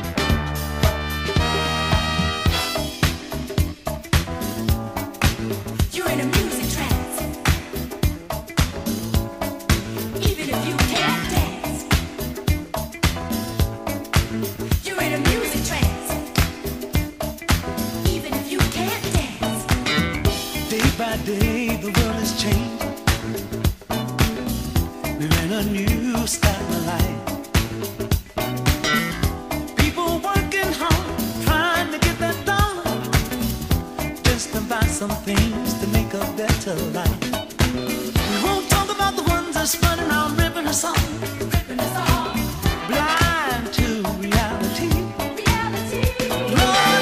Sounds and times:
Pop music: 0:00.0 - 0:47.0.

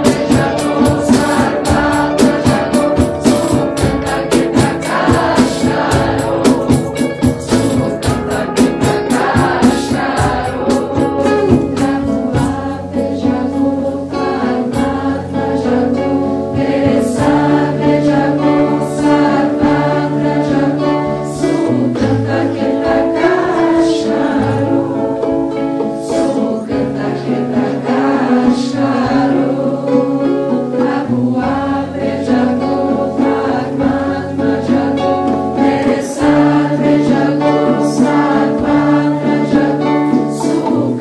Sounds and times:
Mantra: 0:00.0 - 0:41.0
Musical instrument: 0:00.0 - 0:41.0.

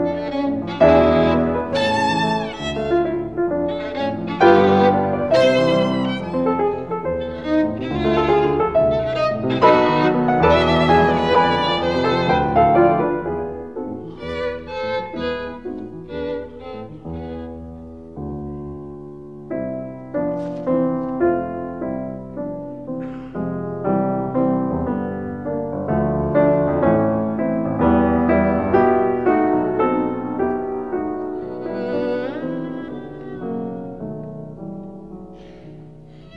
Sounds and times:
Violin, fiddle: 0:00.0 - 0:13.2, 0:14.0 - 0:17.8, 0:30.9 - 0:34.2, 0:36.1 - 0:36.3.

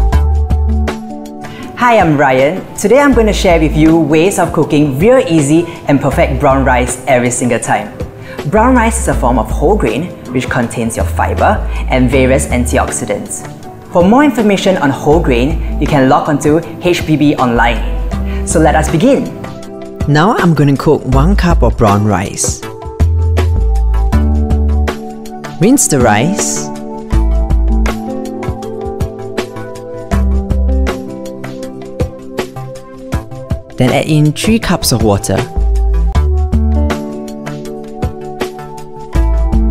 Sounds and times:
Music: 0:00.0 - 0:39.7
Speech: 0:01.8 - 0:07.9, 0:08.5 - 0:13.4, 0:14.0 - 0:17.9, 0:18.5 - 0:19.3, 0:20.1 - 0:22.7, 0:25.6 - 0:26.7, 0:33.8 - 0:35.5.

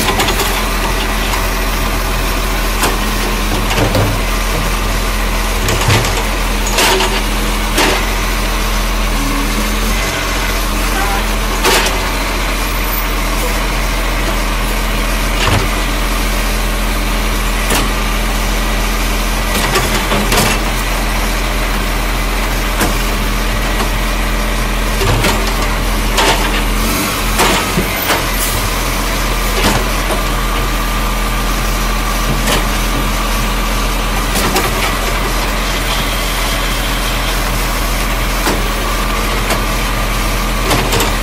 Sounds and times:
Truck: 0:00.0 - 0:41.2.

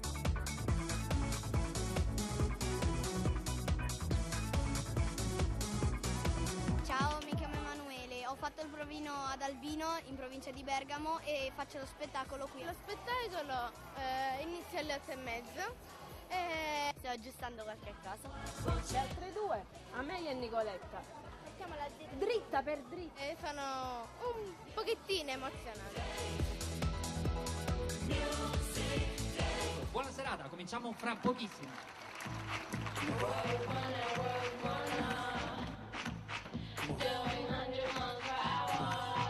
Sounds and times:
Music: 0:00.0 - 0:39.3
Speech: 0:06.9 - 0:25.9.

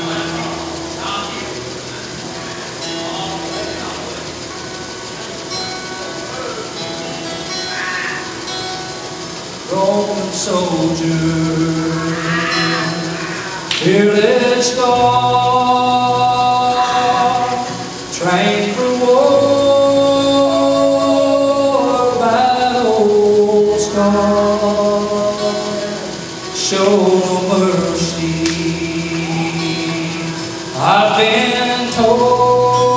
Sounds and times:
Music: 0:00.0 - 0:32.9
Male singing: 0:09.7 - 0:32.9.

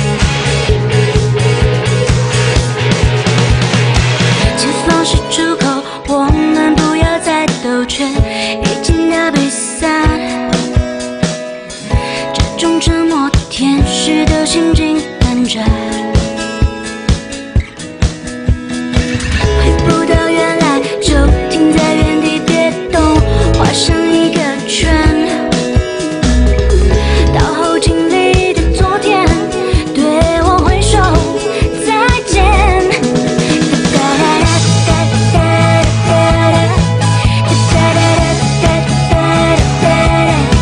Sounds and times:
Music: 0:00.0 - 0:40.6.

